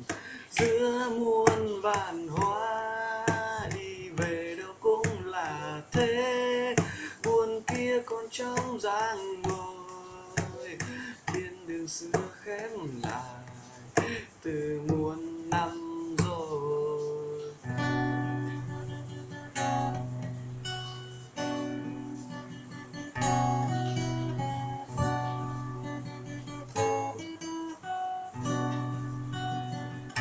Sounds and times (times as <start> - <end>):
Guitar: 0.0 - 30.2.